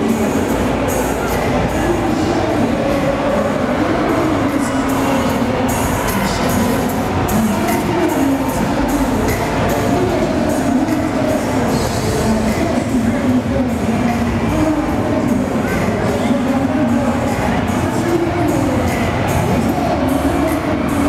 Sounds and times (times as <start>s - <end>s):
Music: 0.0s - 21.0s
Speech: 0.0s - 21.0s.